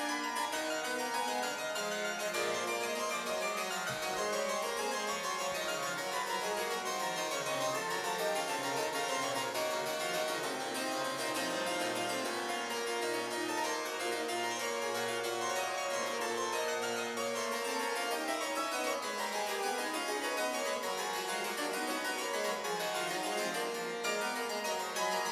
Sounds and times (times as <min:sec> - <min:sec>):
Harpsichord: 0:00.0 - 0:25.3.